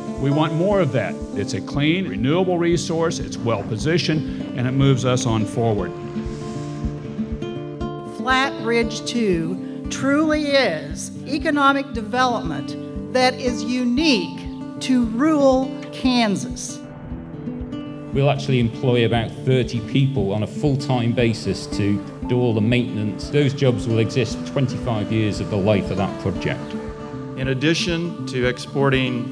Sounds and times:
Music: 0.0 - 29.3
Speech: 0.2 - 5.9, 18.2 - 26.7, 27.4 - 29.3.

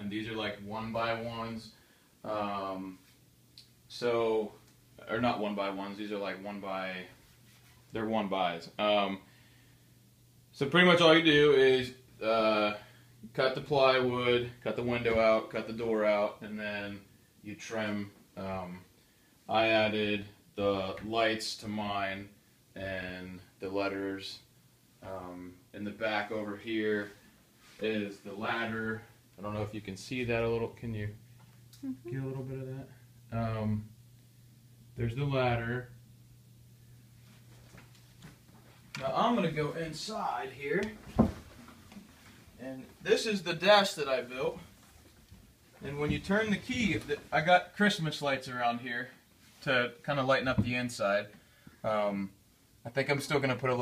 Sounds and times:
Speech: 0.0 - 3.1, 3.9 - 7.2, 7.9 - 9.3, 10.5 - 18.9, 19.5 - 27.2, 27.8 - 31.2, 31.8 - 33.9, 35.0 - 36.0, 39.0 - 41.0, 42.6 - 44.7, 45.8 - 53.8.

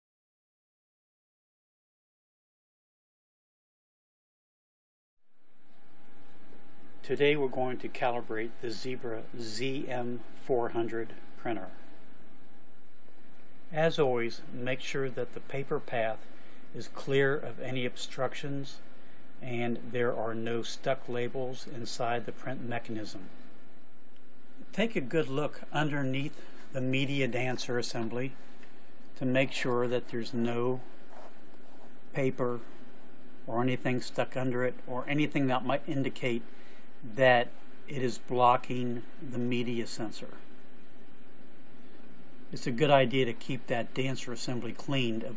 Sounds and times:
Speech: 7.0 - 12.0, 13.7 - 23.4, 24.6 - 28.4, 29.2 - 30.9, 32.1 - 32.7, 33.5 - 40.5, 42.5 - 45.3.

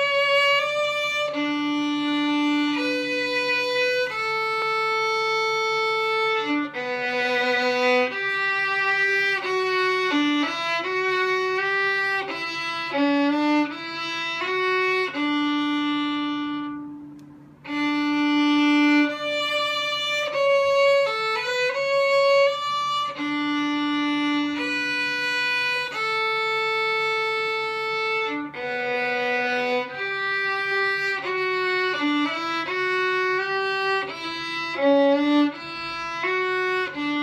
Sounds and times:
Violin, fiddle: 0.0 - 37.2.

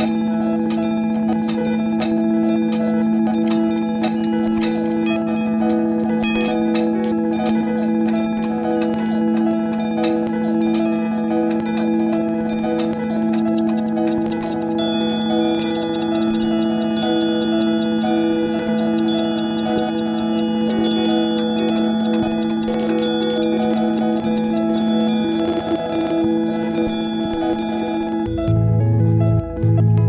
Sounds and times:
Music: 0.0 - 30.0.

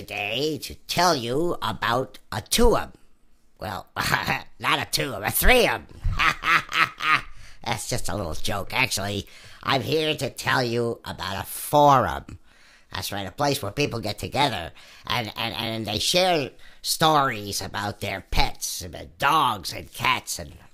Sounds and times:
Speech: 0.0 - 3.0, 3.6 - 5.9, 7.6 - 20.7.

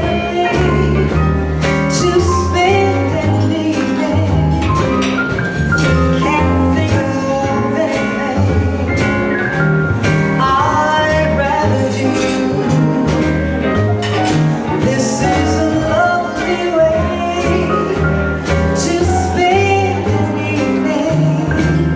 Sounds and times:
Female singing: 0.0 - 4.7, 6.2 - 9.2, 10.4 - 12.8, 14.8 - 21.9
Music: 0.0 - 21.9.

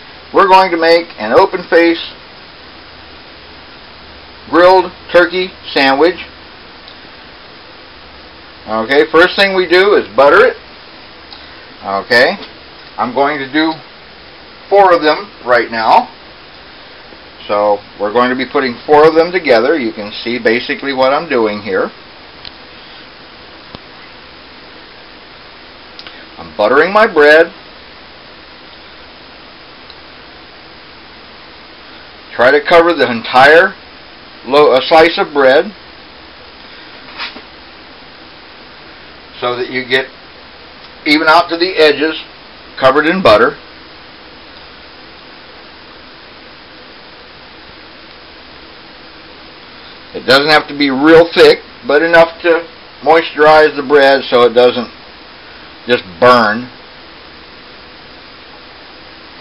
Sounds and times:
Speech: 0.3 - 2.2, 4.5 - 6.3, 8.6 - 10.6, 11.8 - 13.9, 14.7 - 16.2, 17.4 - 22.0, 26.4 - 27.6, 32.3 - 33.8, 34.4 - 35.8, 39.3 - 40.1, 41.0 - 43.6, 50.1 - 55.0, 55.9 - 56.8.

